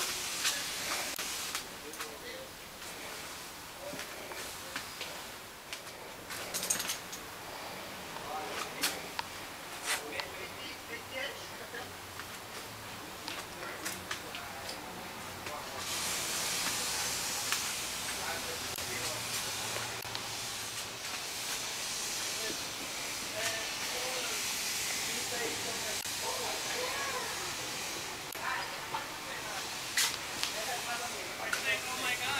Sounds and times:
Speech: 1.8s - 2.5s, 9.9s - 11.9s, 18.1s - 19.7s, 23.3s - 27.6s, 30.4s - 32.3s.

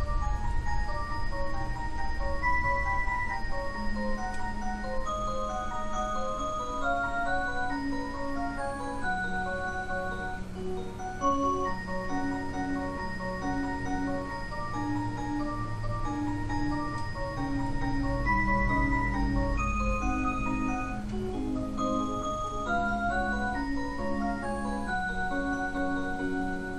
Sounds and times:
Marimba, xylophone: 0.0s - 26.7s.

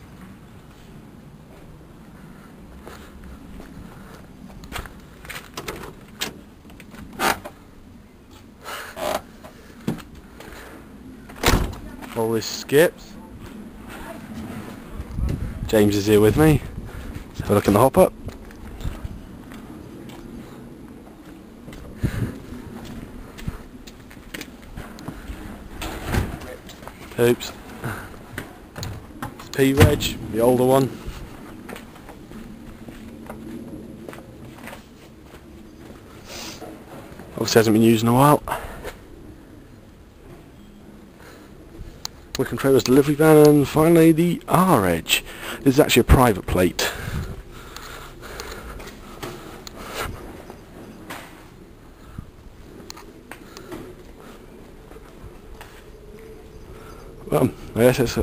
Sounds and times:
Speech: 11.8s - 14.3s, 15.7s - 16.7s, 17.4s - 18.1s, 26.4s - 27.6s, 29.5s - 31.0s, 37.4s - 38.6s, 42.4s - 47.0s, 57.3s - 58.2s.

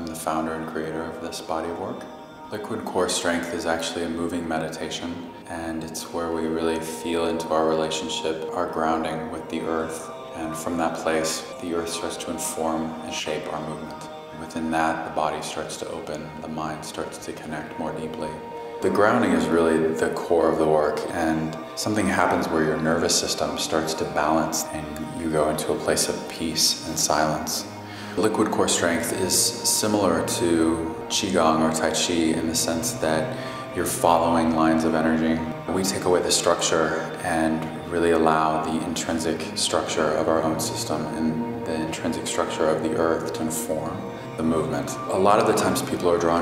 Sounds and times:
Music: 0.0s - 46.4s
Speech: 0.0s - 46.4s.

